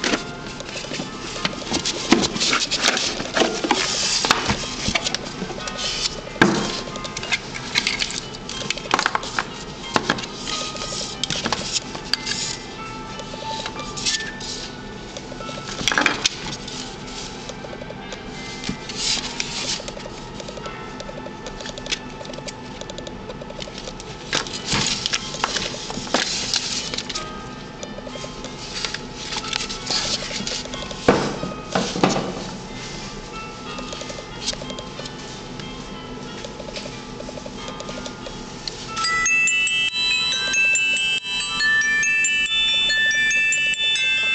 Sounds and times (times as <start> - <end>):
Music: 0.0 - 44.3.